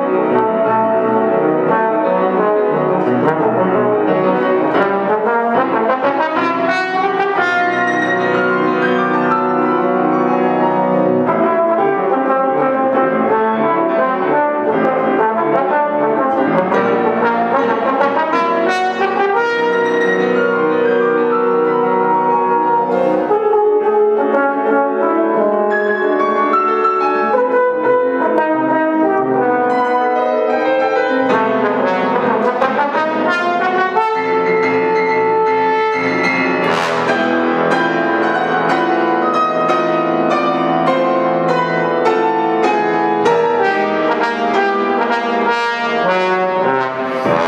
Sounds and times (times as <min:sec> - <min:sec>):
Trombone: 0:00.0 - 0:47.4.